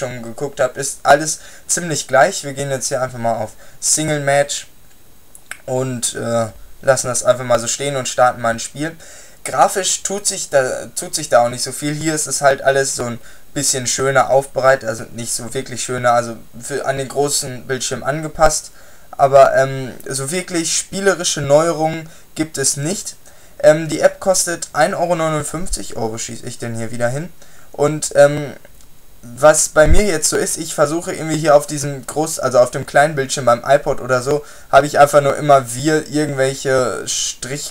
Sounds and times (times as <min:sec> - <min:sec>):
Speech: 0:00.0 - 0:04.8, 0:05.5 - 0:37.7.